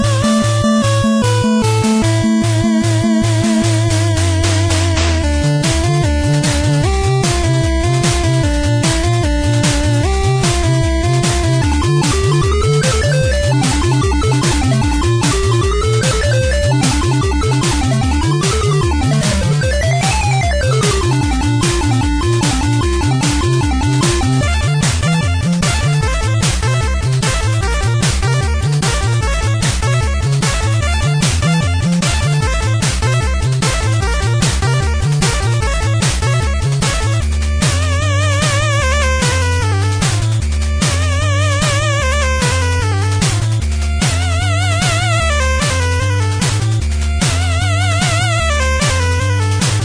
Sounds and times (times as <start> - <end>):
Video game music: 0.0 - 49.8.